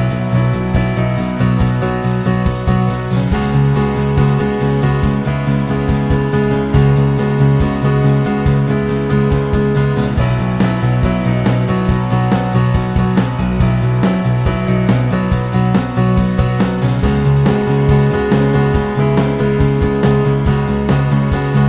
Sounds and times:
Music: 0:00.0 - 0:21.6.

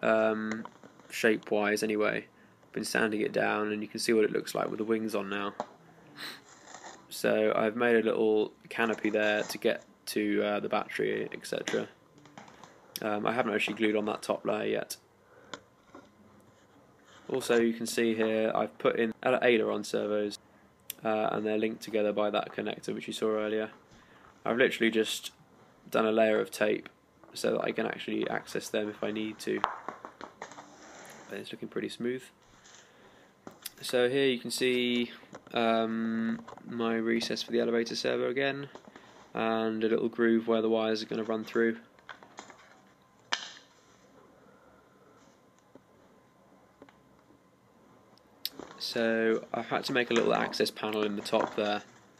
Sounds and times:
Speech: 0:00.0 - 0:05.6, 0:07.1 - 0:12.0, 0:13.0 - 0:15.0, 0:17.3 - 0:23.8, 0:24.5 - 0:29.7, 0:31.3 - 0:32.4, 0:33.7 - 0:38.8, 0:39.4 - 0:41.9, 0:48.8 - 0:51.9
Inside, small room: 0:00.0 - 0:52.1.

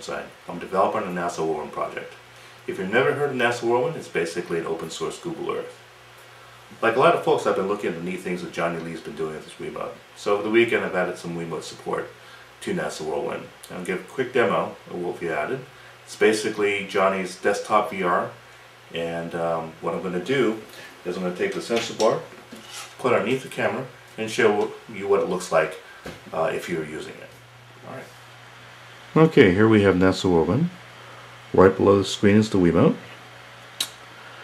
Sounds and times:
Speech: 0:00.0 - 0:05.8, 0:06.8 - 0:28.2, 0:29.1 - 0:30.8, 0:31.5 - 0:33.2.

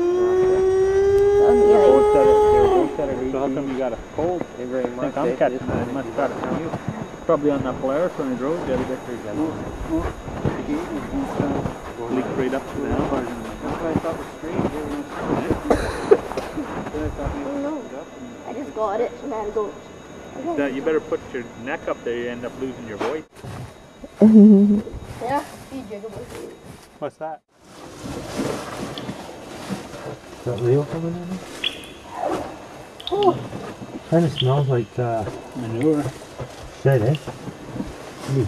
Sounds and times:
Speech: 0:01.4 - 0:15.8, 0:16.6 - 0:19.7, 0:20.4 - 0:23.3, 0:25.2 - 0:27.4, 0:30.5 - 0:31.4, 0:34.1 - 0:36.2, 0:36.8 - 0:37.2.

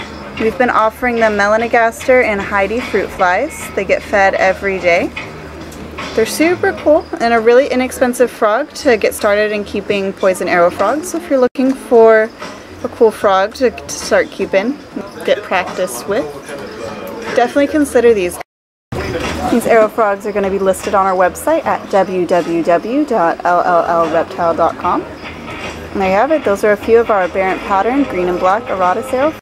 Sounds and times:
Speech: 0:00.4 - 0:05.1, 0:06.2 - 0:12.3, 0:12.9 - 0:18.4, 0:19.0 - 0:25.1, 0:26.0 - 0:29.4.

